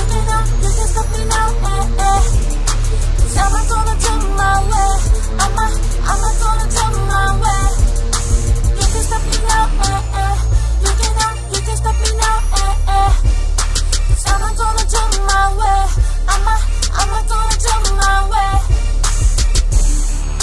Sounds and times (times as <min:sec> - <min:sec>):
Music: 0:00.0 - 0:20.4.